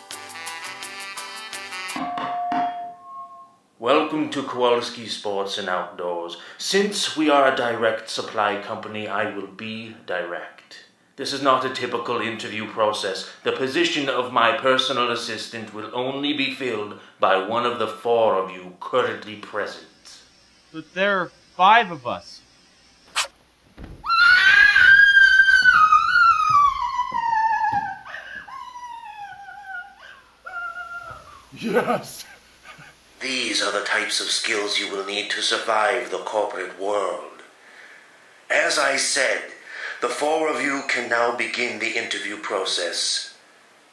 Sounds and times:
Speech: 0:03.8 - 0:20.2, 0:20.8 - 0:22.4, 0:31.5 - 0:32.3, 0:33.2 - 0:37.5, 0:38.5 - 0:43.4.

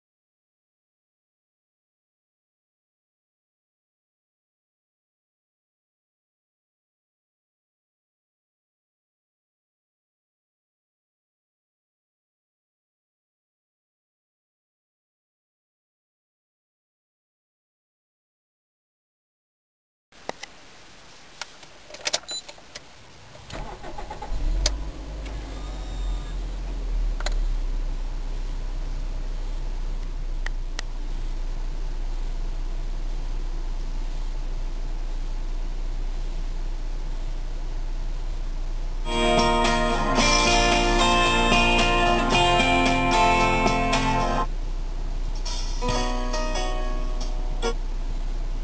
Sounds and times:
Car: 0:22.0 - 0:48.6.

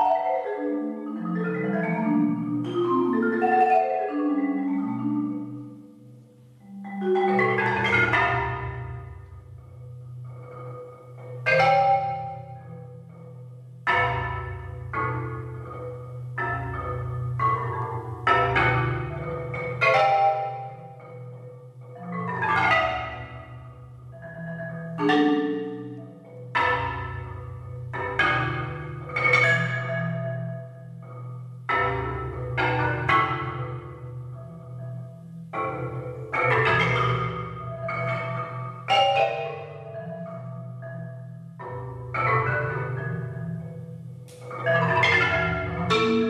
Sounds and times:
Marimba, xylophone: 0:00.0 - 0:46.2.

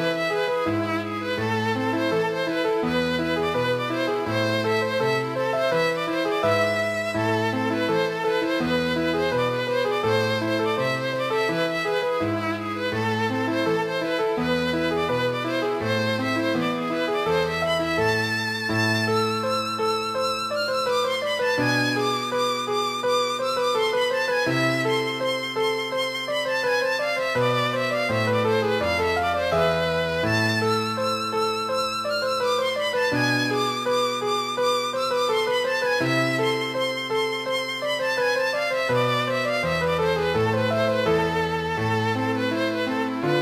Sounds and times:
Violin, fiddle: 0:00.0 - 0:43.4.

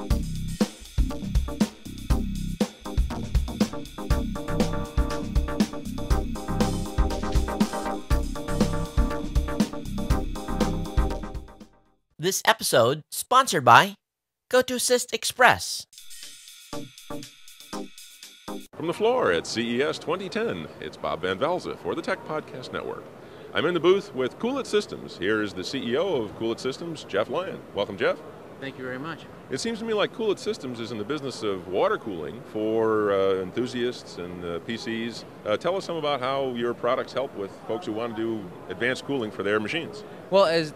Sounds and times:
Speech: 0:12.2 - 0:15.8, 0:18.8 - 0:23.0, 0:23.6 - 0:40.7.

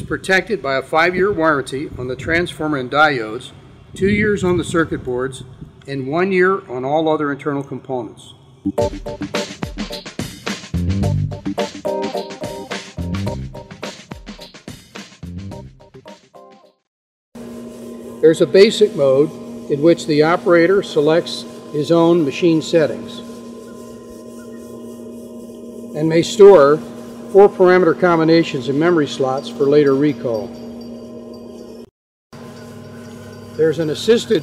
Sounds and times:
Speech: 0:00.0 - 0:08.4, 0:18.2 - 0:23.3, 0:26.0 - 0:26.8, 0:27.4 - 0:30.5, 0:33.6 - 0:34.4.

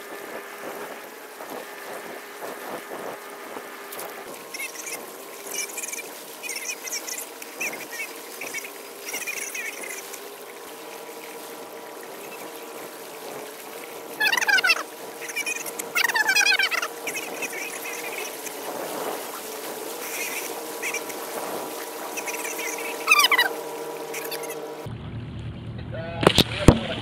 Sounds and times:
Boat, Water vehicle: 0:00.0 - 0:27.0.

